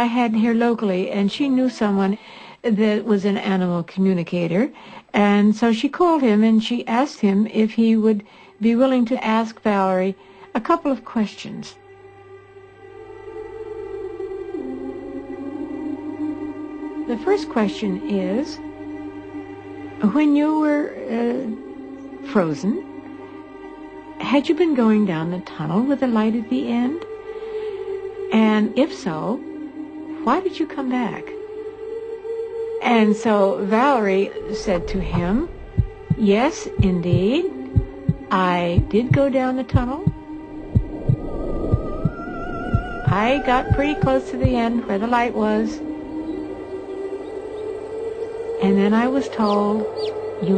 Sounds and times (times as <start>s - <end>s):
Speech: 0.0s - 11.8s, 17.1s - 18.6s, 20.0s - 21.6s, 24.2s - 27.0s, 28.4s - 29.4s, 30.3s - 31.3s, 32.8s - 35.5s, 36.2s - 37.5s, 38.3s - 40.1s, 43.1s - 45.8s, 48.6s - 50.5s
Music: 0.0s - 50.5s
Bird: 49.3s - 50.5s.